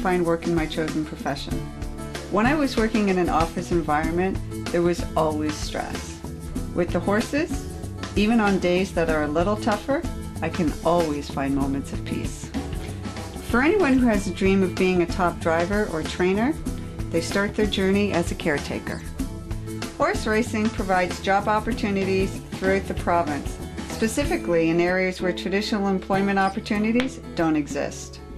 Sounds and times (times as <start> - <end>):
Speech: 0.0 - 1.6, 2.3 - 6.2, 6.8 - 7.6, 8.2 - 12.5, 13.5 - 19.0, 20.0 - 28.2
Music: 0.0 - 28.3.